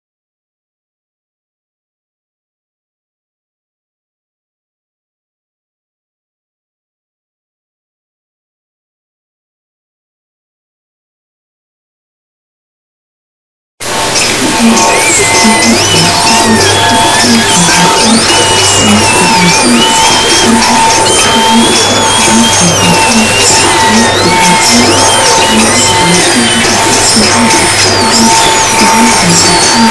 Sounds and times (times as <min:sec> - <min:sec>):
Music: 0:13.8 - 0:29.9
Hubbub, speech noise, speech babble: 0:13.9 - 0:29.9.